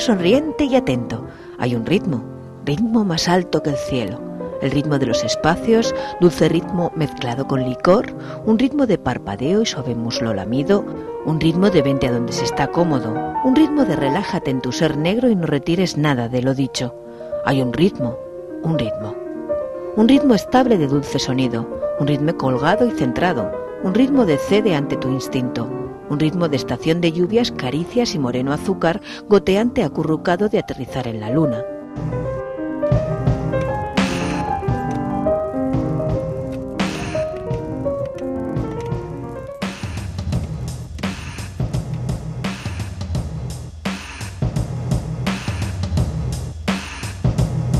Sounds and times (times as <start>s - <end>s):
Speech: 0.0s - 19.2s, 20.0s - 31.7s
Music: 0.0s - 47.7s.